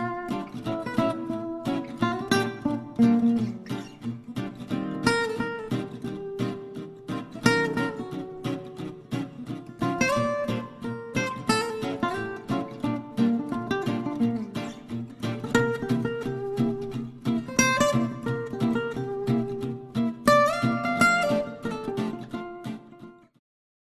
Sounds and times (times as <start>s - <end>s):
Music: 0.0s - 23.4s.